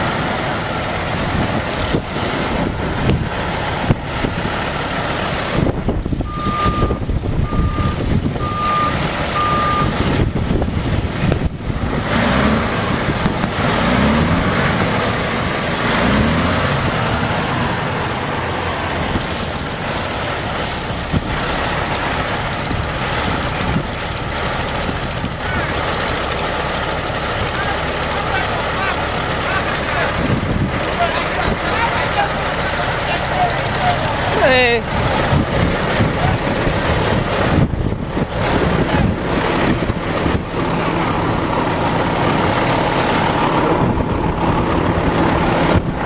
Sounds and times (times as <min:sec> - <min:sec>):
Truck: 0:00.0 - 0:46.0.